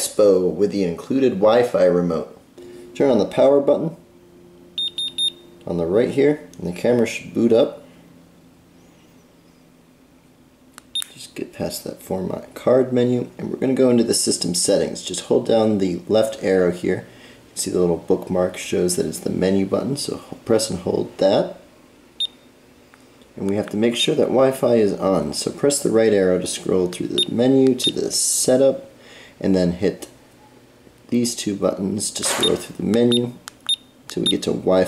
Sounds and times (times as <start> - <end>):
Speech: 0.0 - 2.4, 3.0 - 4.0, 5.6 - 7.8, 11.1 - 21.6, 23.4 - 30.2, 31.1 - 33.4, 34.1 - 34.8.